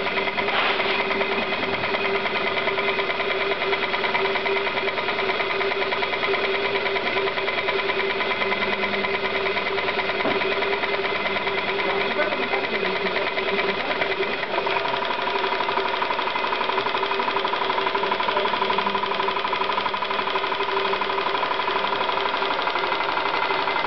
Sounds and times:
Idling: 0:00.0 - 0:23.8
Speech: 0:11.8 - 0:14.2, 0:18.1 - 0:19.0.

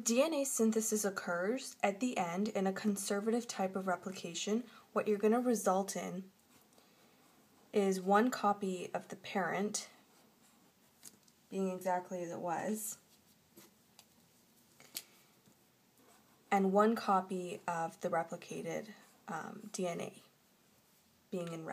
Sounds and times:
Speech: 0:00.0 - 0:06.3, 0:07.8 - 0:10.0, 0:11.5 - 0:13.0, 0:16.5 - 0:20.3, 0:21.3 - 0:21.7
Inside, small room: 0:00.0 - 0:21.7.

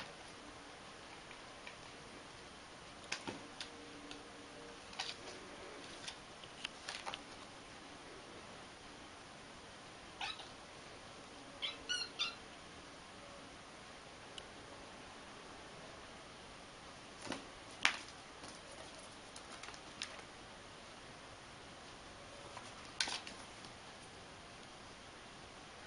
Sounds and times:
Cat: 0:10.2 - 0:10.6, 0:11.6 - 0:12.4.

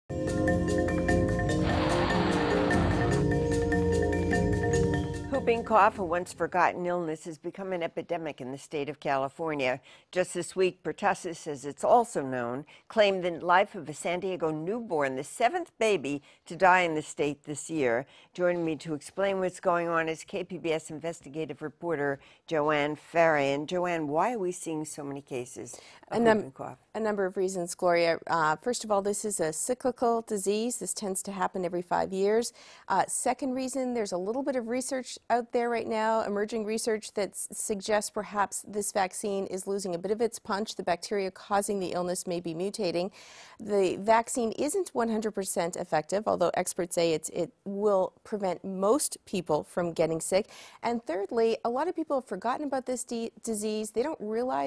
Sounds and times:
Music: 0:00.1 - 0:06.4
Female speech, woman speaking: 0:05.3 - 0:54.6.

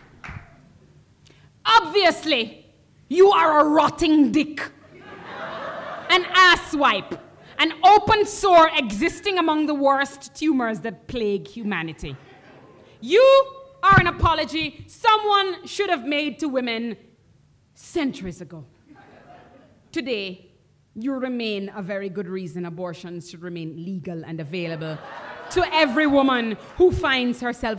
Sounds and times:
Speech: 0:01.7 - 0:04.8, 0:06.1 - 0:12.2, 0:13.0 - 0:17.1, 0:17.8 - 0:18.7, 0:19.9 - 0:27.7.

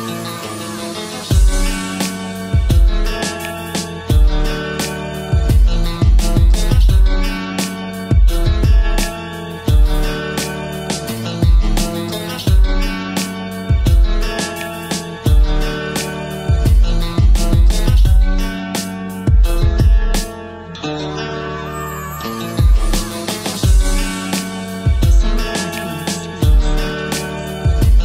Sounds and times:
Strum: 0:01.3 - 0:28.0.

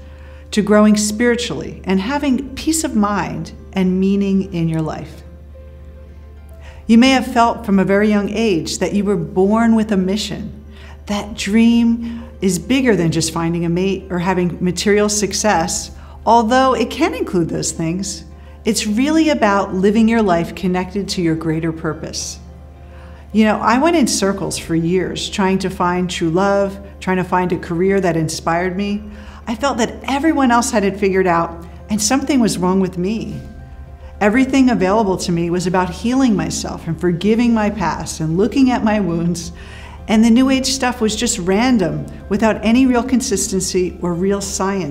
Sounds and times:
Music: 0:00.0 - 0:44.9
Speech: 0:00.5 - 0:05.2, 0:06.9 - 0:22.4, 0:23.4 - 0:33.5, 0:34.2 - 0:44.9.

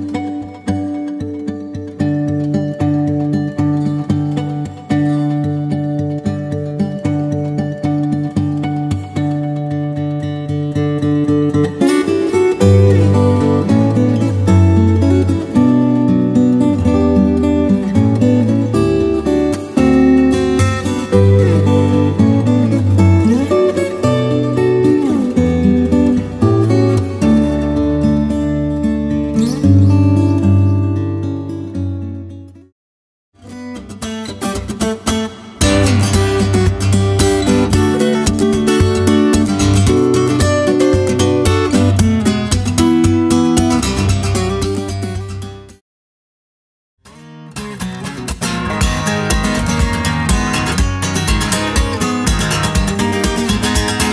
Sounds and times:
Acoustic guitar: 0:00.0 - 0:32.7, 0:33.4 - 0:45.8, 0:47.0 - 0:54.1.

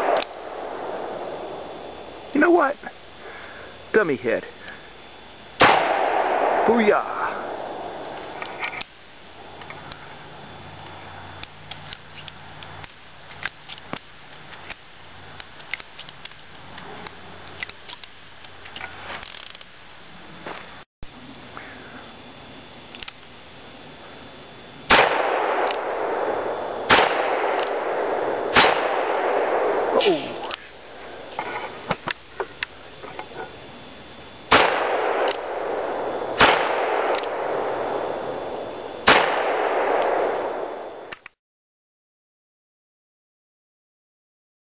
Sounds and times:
Outside, rural or natural: 0:00.0 - 0:41.4.

